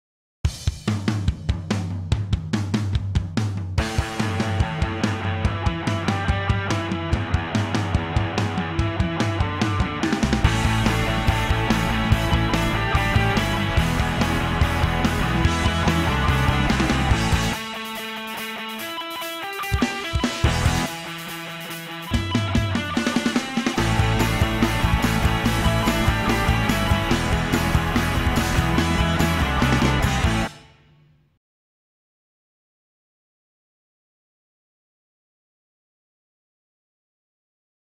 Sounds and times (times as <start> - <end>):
Music: 0.4 - 31.4.